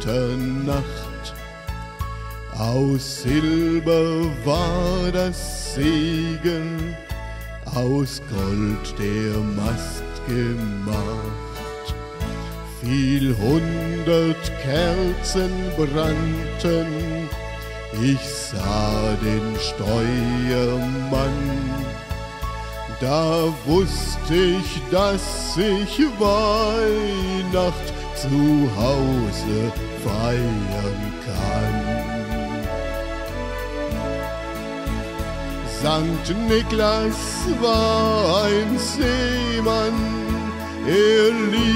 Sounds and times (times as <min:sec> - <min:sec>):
Male singing: 0:00.0 - 0:01.4, 0:02.6 - 0:07.1, 0:07.7 - 0:12.0, 0:12.7 - 0:22.1, 0:22.9 - 0:32.7, 0:35.6 - 0:41.7
Music: 0:00.0 - 0:41.7.